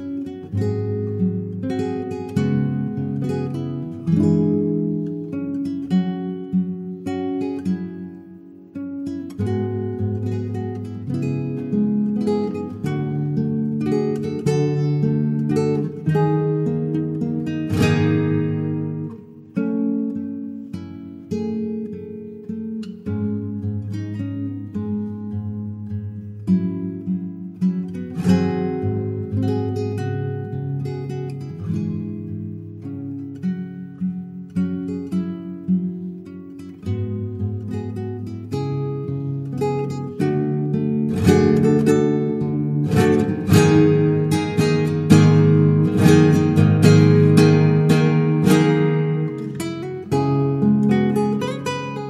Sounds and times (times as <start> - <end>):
Acoustic guitar: 0.0 - 52.1
Strum: 0.0 - 52.1.